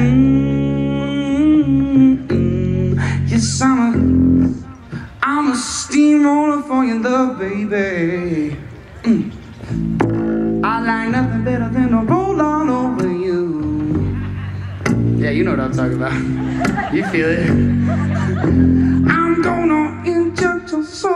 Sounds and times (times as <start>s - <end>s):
Music: 0.0s - 5.2s, 9.6s - 21.1s.